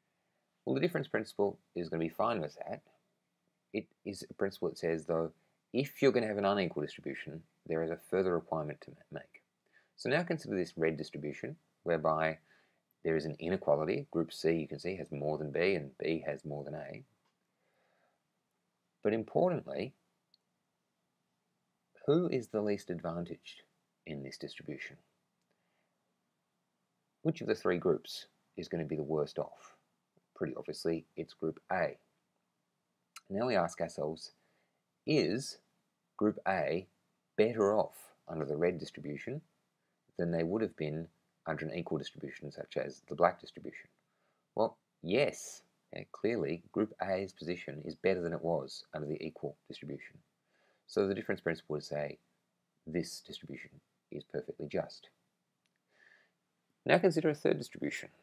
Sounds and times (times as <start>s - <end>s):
Inside, small room: 0.0s - 58.2s
Speech: 0.7s - 3.0s, 3.8s - 17.1s, 19.0s - 20.0s, 22.0s - 25.1s, 27.3s - 29.8s, 30.4s - 32.0s, 33.2s - 34.4s, 35.1s - 35.6s, 36.2s - 39.5s, 40.2s - 44.0s, 44.6s - 50.2s, 50.9s - 52.2s, 52.9s - 55.2s, 56.8s - 58.2s.